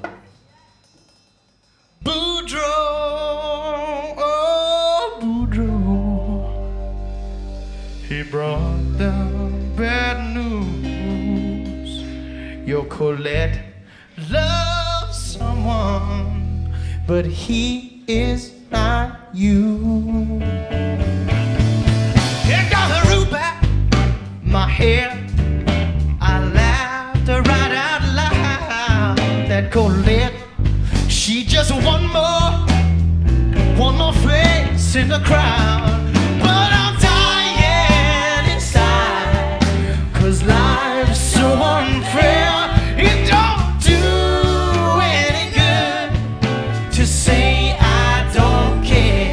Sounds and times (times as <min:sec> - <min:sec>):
Music: 0:00.0 - 0:49.3.